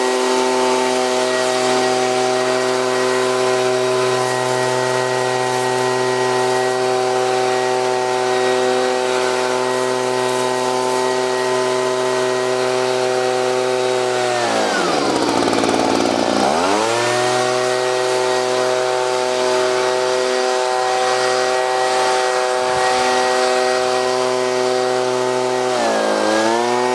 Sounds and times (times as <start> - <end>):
Power tool: 0.0 - 26.9.